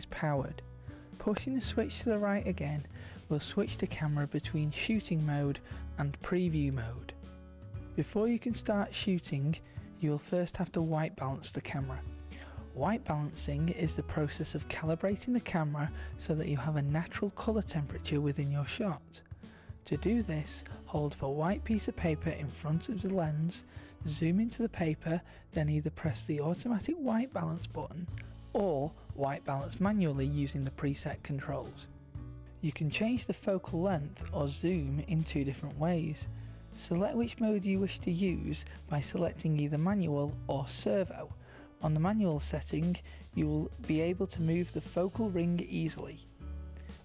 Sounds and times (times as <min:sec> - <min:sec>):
Speech: 0:00.0 - 0:00.6, 0:01.2 - 0:07.2, 0:08.0 - 0:12.1, 0:12.8 - 0:19.2, 0:19.8 - 0:31.9, 0:32.6 - 0:46.3
Music: 0:00.0 - 0:47.0.